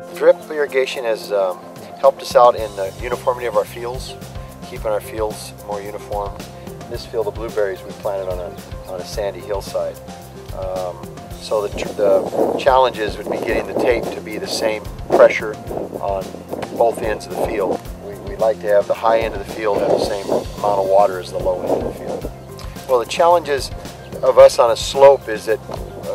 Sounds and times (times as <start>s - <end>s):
Speech: 0.0s - 10.0s, 10.6s - 22.3s, 22.9s - 26.1s
Music: 0.0s - 26.1s.